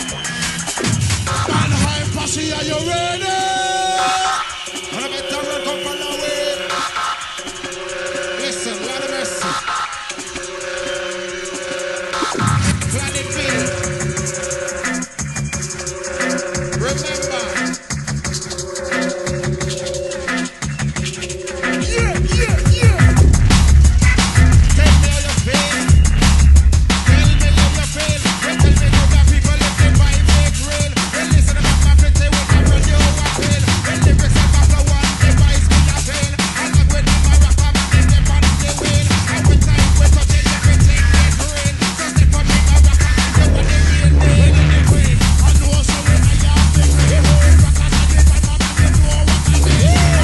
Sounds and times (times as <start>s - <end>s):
Drum and bass: 0.0s - 50.2s
Reggae: 0.0s - 50.2s.